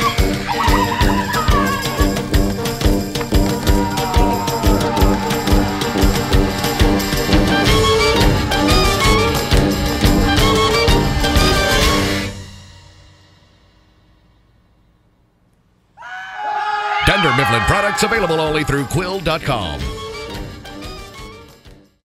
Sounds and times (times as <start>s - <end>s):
Music: 0.0s - 15.2s, 17.2s - 22.0s
Speech: 17.0s - 19.9s.